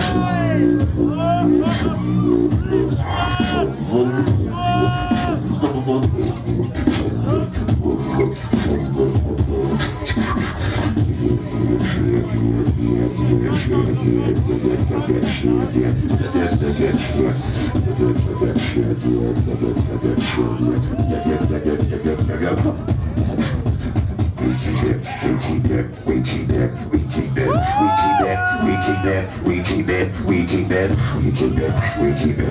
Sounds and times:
Speech: 0.0 - 10.1, 11.7 - 23.6, 24.3 - 32.5
Electronic music: 0.0 - 26.0
Beatboxing: 0.0 - 32.5.

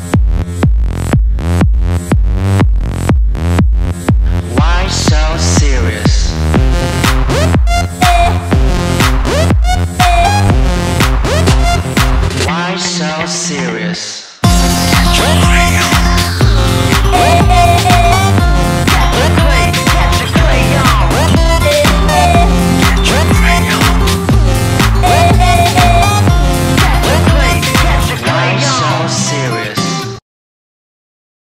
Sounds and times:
Music: 0.0 - 30.2.

